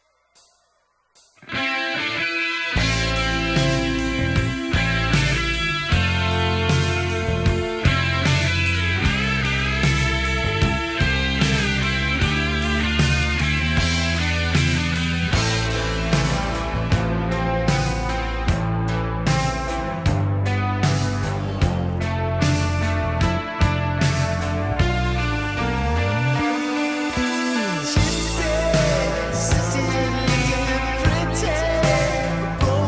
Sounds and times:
Electric guitar: 0:01.3 - 0:32.8.

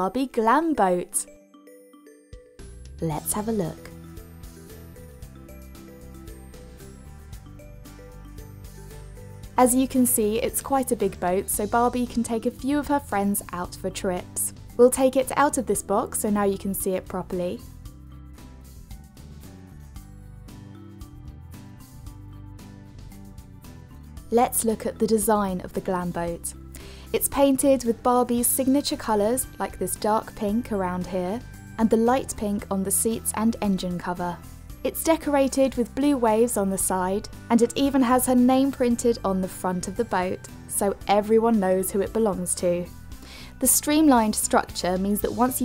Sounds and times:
Speech: 0:00.0 - 0:01.3, 0:03.0 - 0:03.9, 0:09.6 - 0:17.6, 0:24.3 - 0:26.6, 0:27.2 - 0:42.9, 0:43.6 - 0:45.6
Music: 0:00.0 - 0:45.6.

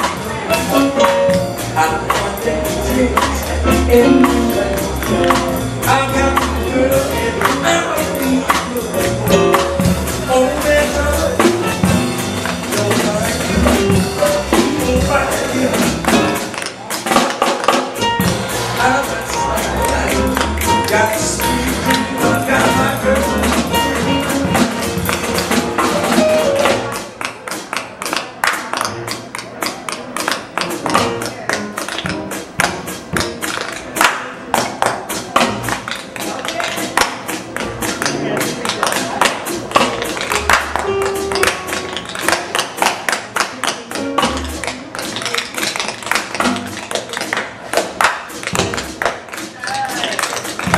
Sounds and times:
Music: 0:00.0 - 0:50.7.

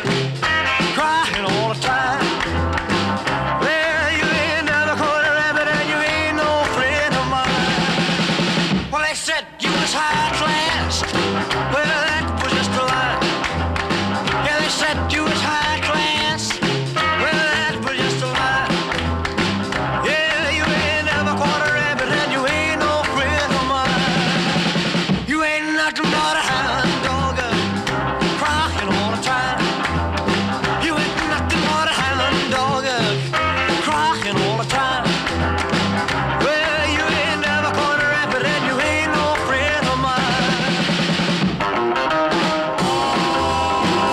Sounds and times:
Music: 0:00.0 - 0:44.1.

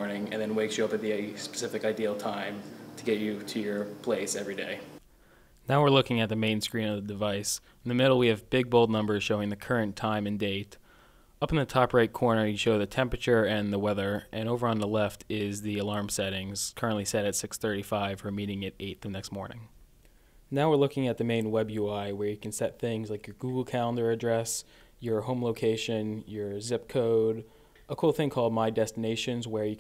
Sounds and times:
Speech: 0:00.0 - 0:05.0, 0:05.7 - 0:10.8, 0:11.4 - 0:19.7, 0:20.5 - 0:29.8.

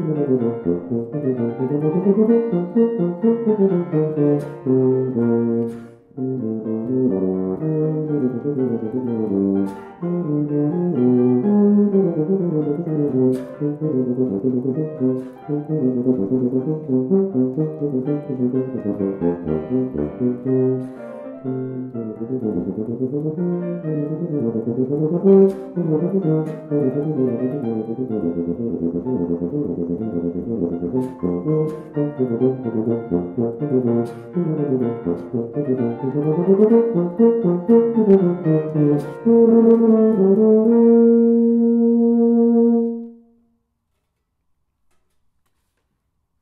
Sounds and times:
Brass instrument: 0:00.0 - 0:43.6.

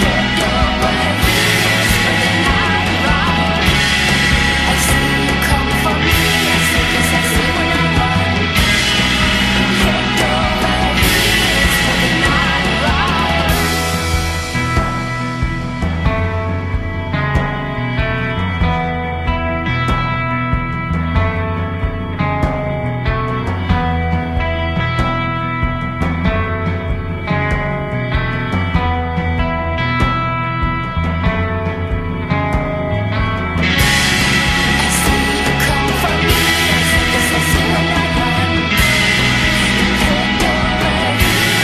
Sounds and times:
Punk rock: 0:00.0 - 0:41.6.

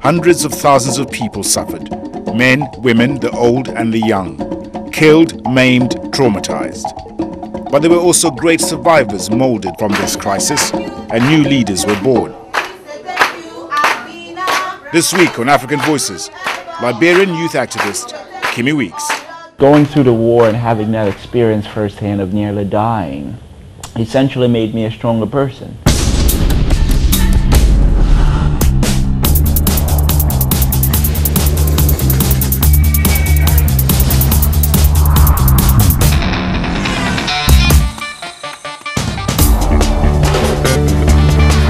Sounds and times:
Angry music: 0:25.9 - 0:41.6.

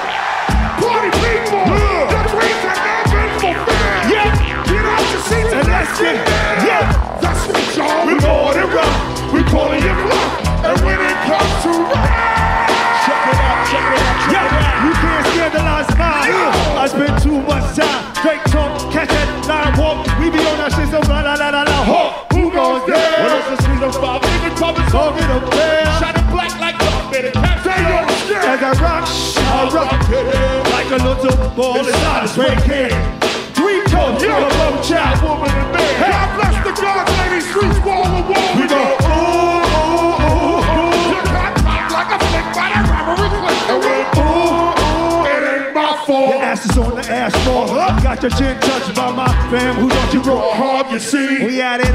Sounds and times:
Music: 0:00.0 - 0:51.9.

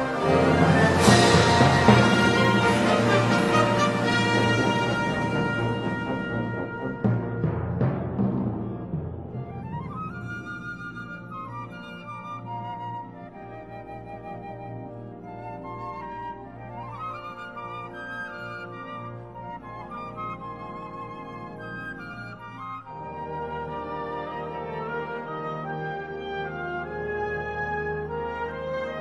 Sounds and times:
Exciting music: 0:00.0 - 0:24.1.

